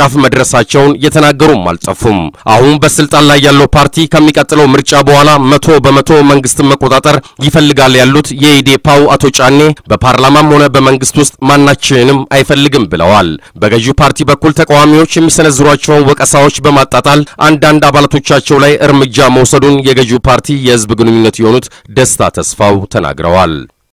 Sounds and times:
Speech: 0:00.0 - 0:23.7.

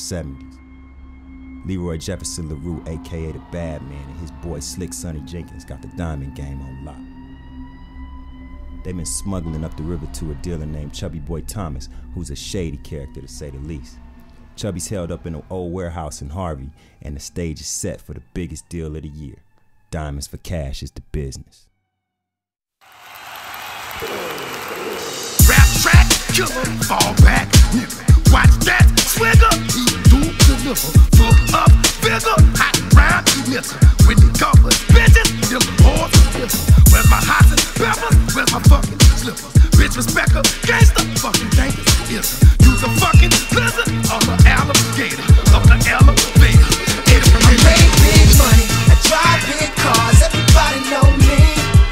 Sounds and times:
Music: 0:00.0 - 0:21.8, 0:23.1 - 0:51.9.

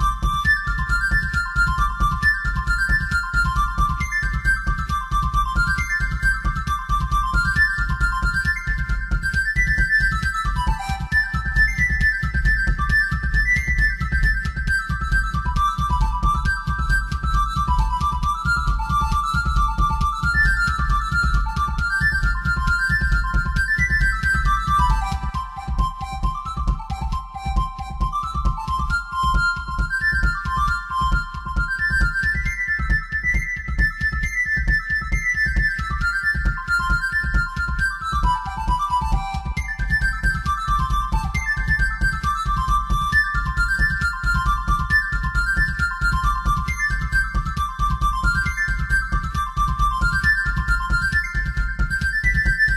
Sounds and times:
Music: 0:00.0 - 0:52.7
Ringtone: 0:16.0 - 0:52.7.

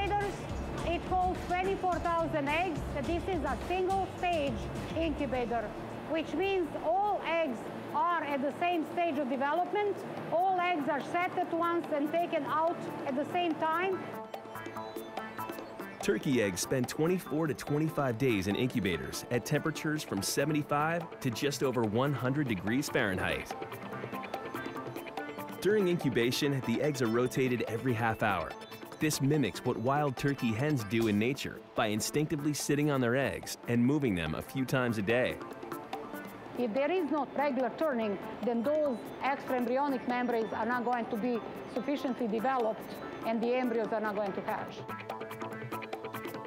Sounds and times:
Music: 0:00.0 - 0:46.4
Speech: 0:00.9 - 0:14.0, 0:16.0 - 0:23.5, 0:25.6 - 0:35.4, 0:36.6 - 0:44.8.

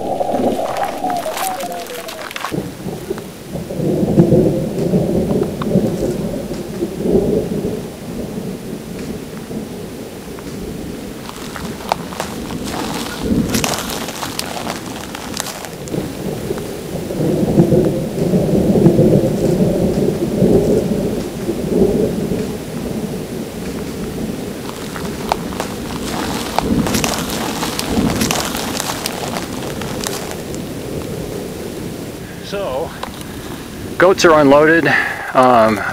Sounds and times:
Thunderstorm: 0:00.0 - 0:35.2.

